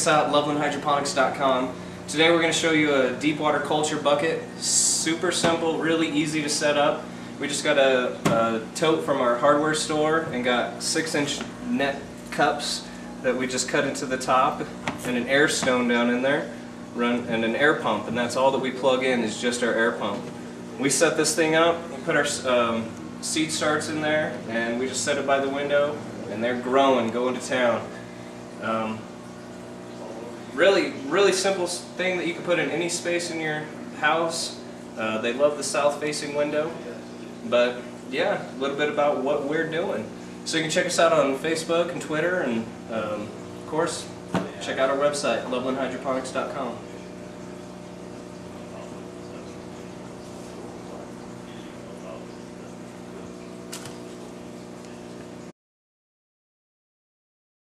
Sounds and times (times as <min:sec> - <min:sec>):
Speech: 0:00.0 - 0:28.0, 0:28.6 - 0:29.1, 0:30.0 - 0:47.0, 0:48.7 - 0:49.6, 0:50.7 - 0:53.4.